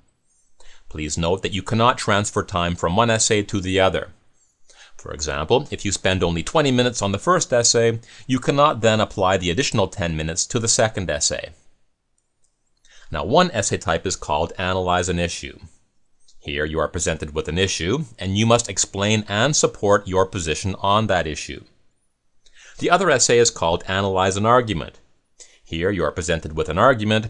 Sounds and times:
Speech: 0.9 - 4.2, 5.0 - 11.7, 13.1 - 15.8, 16.4 - 21.8, 22.7 - 25.0, 25.7 - 27.2.

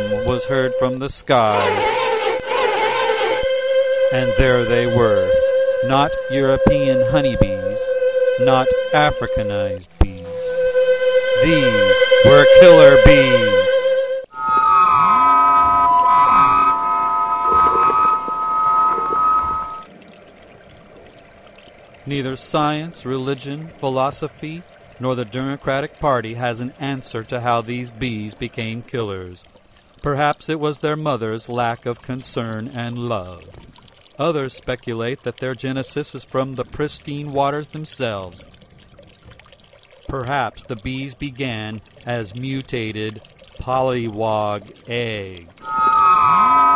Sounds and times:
Speech: 0.0 - 1.8, 4.1 - 10.6, 11.4 - 13.8, 22.1 - 29.4, 30.1 - 33.5, 34.2 - 38.5, 40.1 - 45.7
Pour: 17.2 - 46.7.

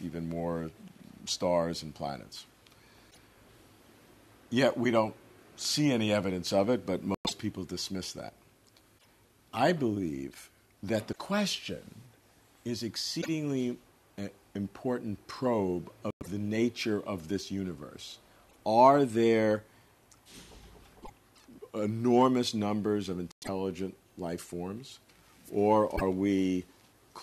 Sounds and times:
Speech: 0.0 - 2.5, 4.5 - 8.4, 9.5 - 19.7, 21.6 - 27.2.

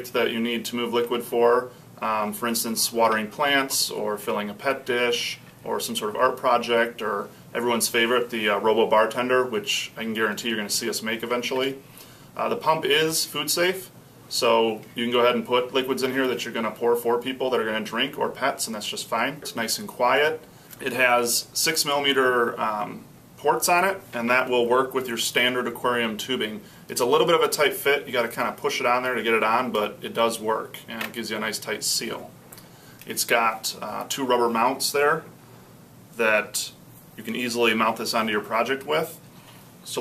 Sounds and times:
Speech: 0.0 - 11.8, 12.4 - 32.4, 33.0 - 35.3, 36.2 - 39.2.

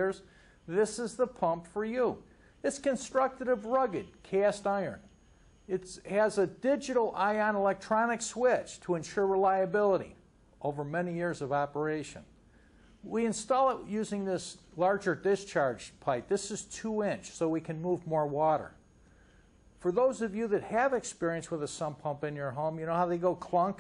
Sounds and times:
Speech: 0.0 - 5.1, 5.7 - 12.3, 13.0 - 18.8, 19.8 - 23.8.

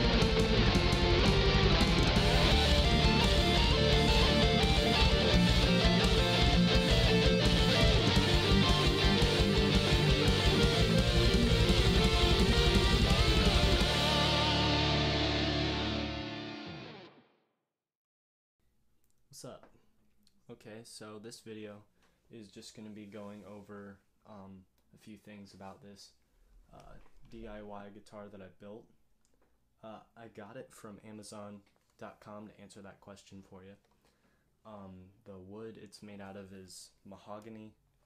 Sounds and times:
Speech: 19.3 - 19.8, 20.4 - 29.0, 29.8 - 33.8, 34.6 - 37.8.

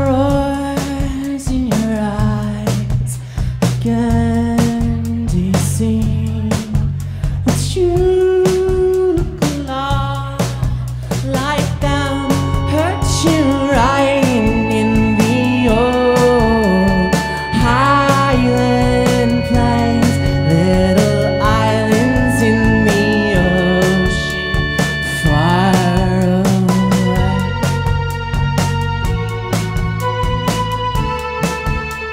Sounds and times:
Music: 0.0 - 32.1.

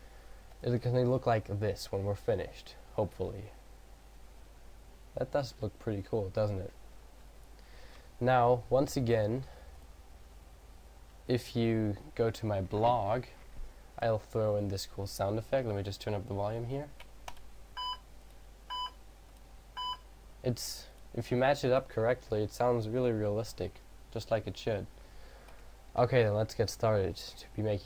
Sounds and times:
Speech: 0.6 - 3.6, 5.2 - 6.8, 8.2 - 9.5, 11.3 - 13.4, 14.0 - 17.0, 20.4 - 24.9, 26.0 - 27.8.

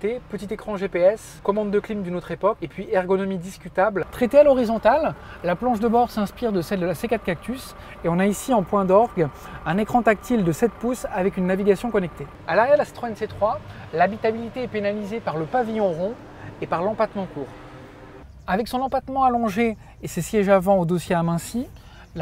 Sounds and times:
Speech: 0.0 - 17.5, 18.4 - 22.2.

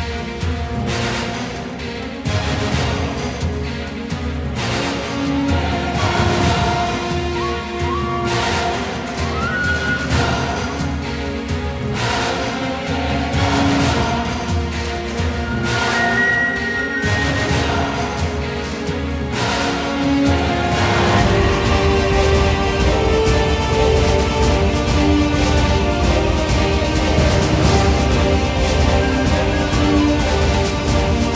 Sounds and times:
Music: 0.0 - 31.3.

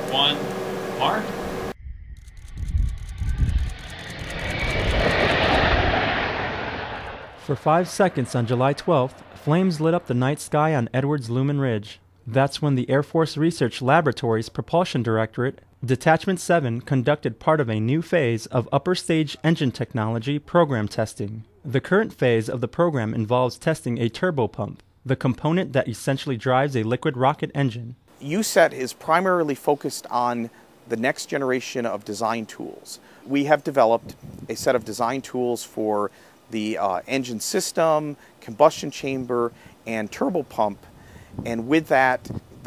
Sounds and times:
Speech: 0.0 - 0.4, 1.0 - 1.3, 7.4 - 42.4.

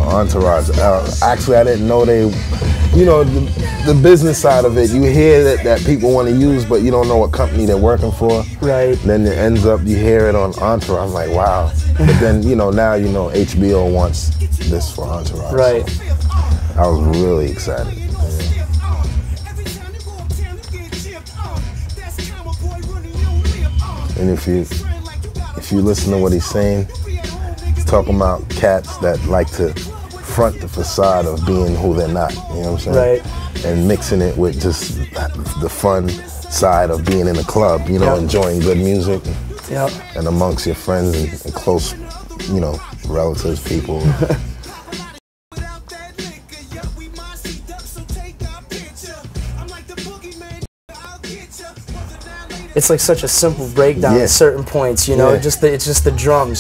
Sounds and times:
Speech: 0.0 - 16.0, 16.8 - 18.6, 24.2 - 24.9, 25.6 - 27.0, 27.8 - 44.3, 52.8 - 56.6
Musical instrument: 10.9 - 30.5.

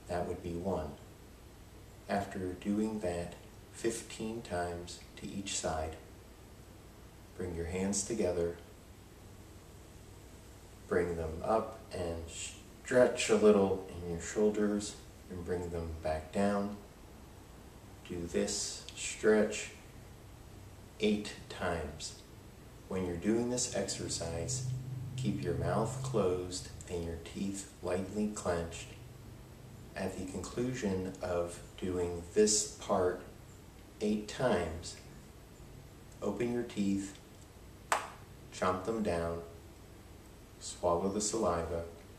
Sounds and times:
Speech: 0.0 - 1.1, 2.1 - 6.1, 7.4 - 8.7, 10.9 - 16.9, 18.0 - 19.8, 21.0 - 22.3, 22.9 - 29.0, 29.9 - 33.4, 34.0 - 35.1, 36.2 - 37.2, 38.5 - 39.6, 40.6 - 42.0.

